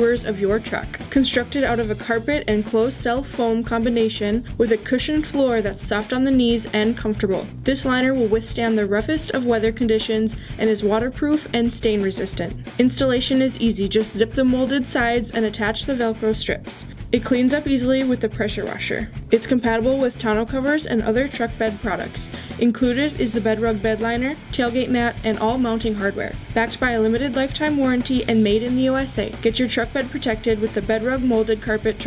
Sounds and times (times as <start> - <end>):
Music: 0.0 - 32.0
Speech: 0.0 - 32.0.